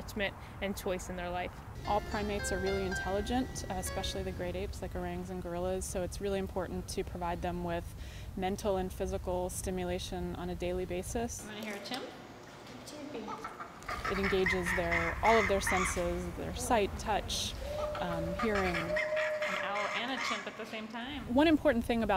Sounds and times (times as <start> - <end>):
Animal: 17.6 - 20.6.